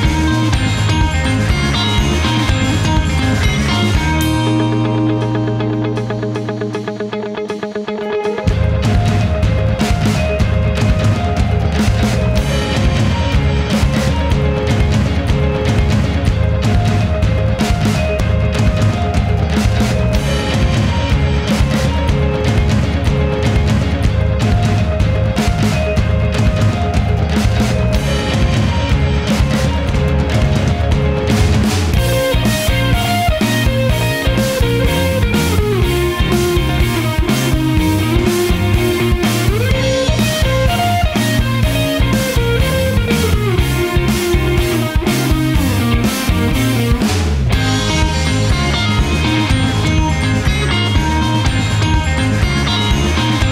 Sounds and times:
Music: 0.0 - 53.5.

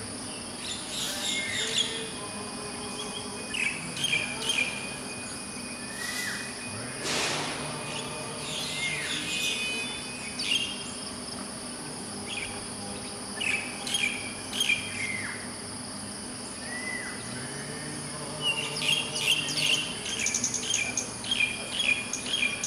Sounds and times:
Chirp, tweet: 0.2 - 11.1, 12.2 - 15.5, 16.4 - 22.6.

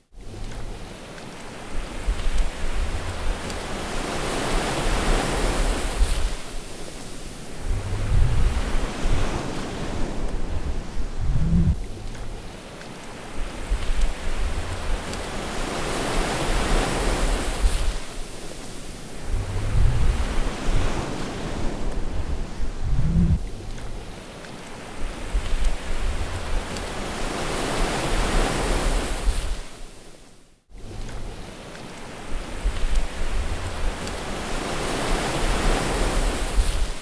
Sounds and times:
Ocean: 0.0 - 37.0.

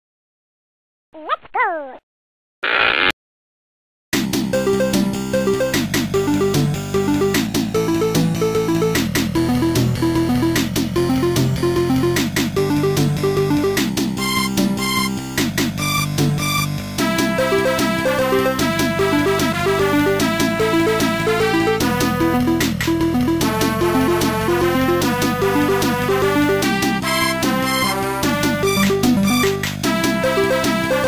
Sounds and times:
Music: 4.2 - 31.0.

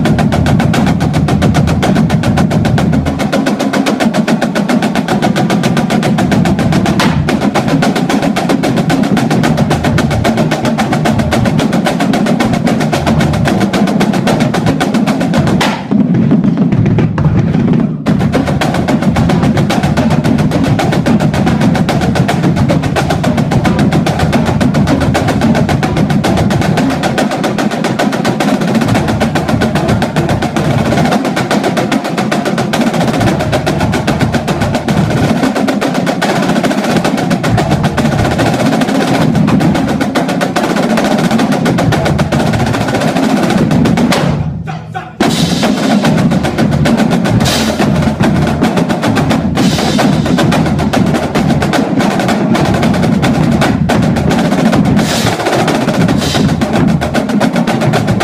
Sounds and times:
Bass drum: 0.0 - 58.2
Drum roll: 0.0 - 58.2.

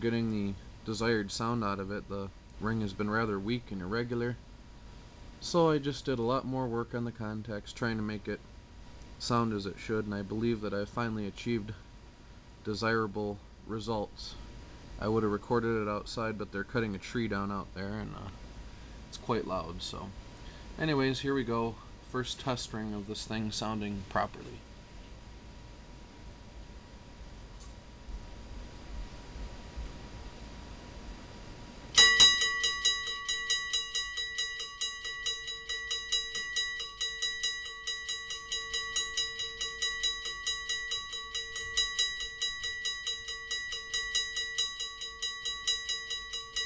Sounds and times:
Speech: 0.0 - 4.4, 5.4 - 8.4, 9.2 - 11.8, 12.6 - 14.4, 15.0 - 18.4, 19.1 - 20.2, 20.8 - 24.6.

